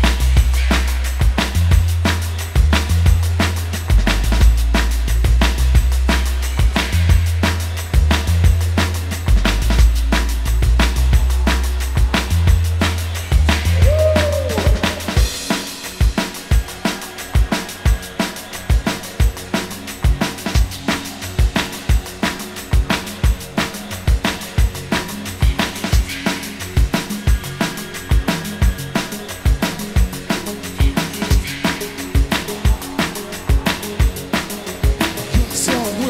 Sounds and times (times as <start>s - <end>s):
Music: 0.0s - 36.1s.